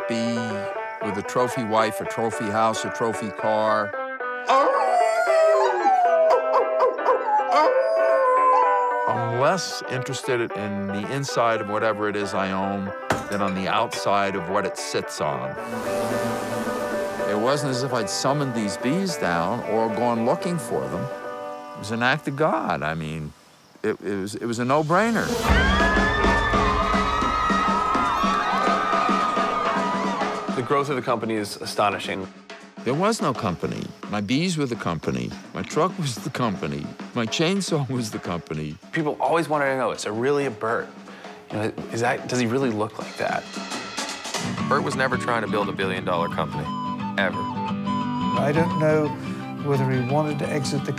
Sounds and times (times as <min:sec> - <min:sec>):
Speech: 0:00.0 - 0:03.9, 0:09.1 - 0:15.5, 0:17.3 - 0:21.1, 0:21.8 - 0:25.4, 0:30.6 - 0:32.3, 0:32.9 - 0:40.9, 0:41.5 - 0:43.5, 0:44.6 - 0:47.4, 0:48.4 - 0:50.9
Music: 0:00.0 - 0:23.4, 0:24.4 - 0:50.9.